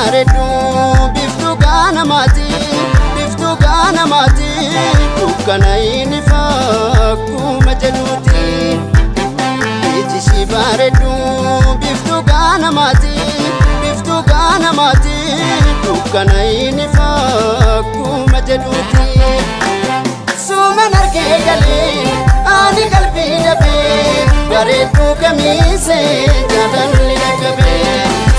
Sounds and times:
Blues: 0:00.0 - 0:28.3.

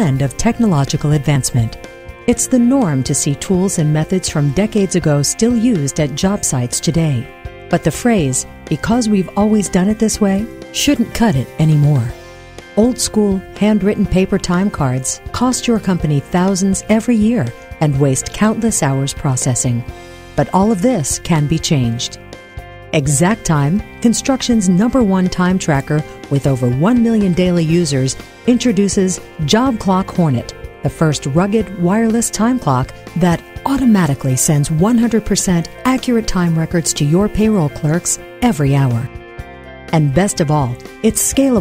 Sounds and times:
Speech: 0:00.0 - 0:12.2, 0:12.8 - 0:22.2, 0:23.0 - 0:39.1, 0:39.9 - 0:41.6
Music: 0:00.0 - 0:41.6.

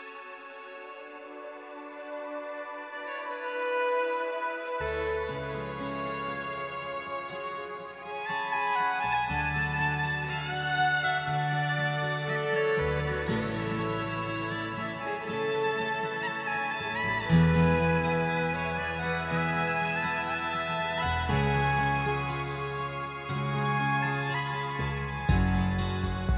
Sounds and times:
Tender music: 0:00.0 - 0:26.3
Theme music: 0:00.0 - 0:26.3.

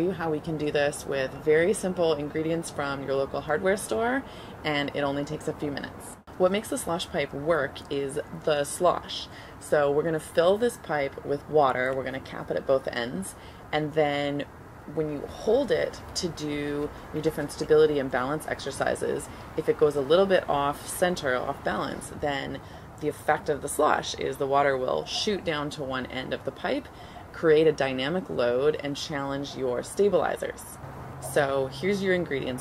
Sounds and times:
Speech: 0:00.0 - 0:32.6.

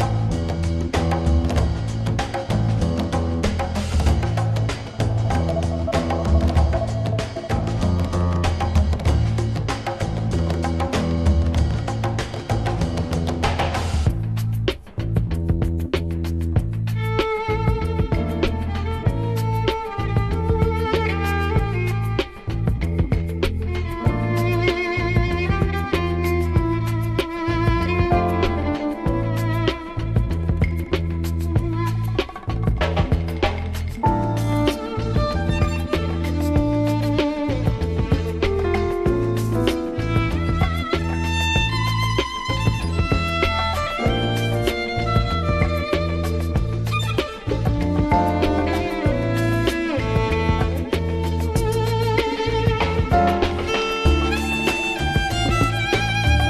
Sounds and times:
Violin, fiddle: 0:00.0 - 0:13.7, 0:15.9 - 0:56.4.

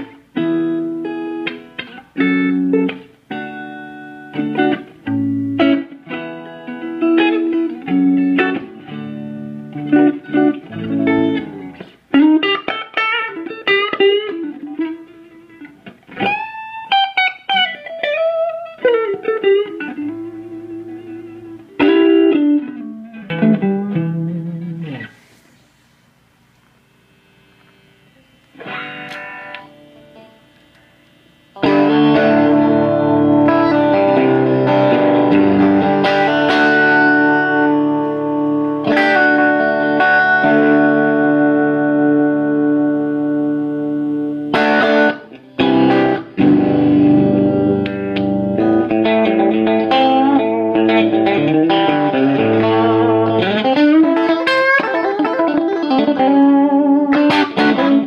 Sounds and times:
Steel guitar, slide guitar: 0:00.0 - 0:25.4, 0:31.6 - 0:58.0
Effects unit: 0:00.0 - 0:58.0.

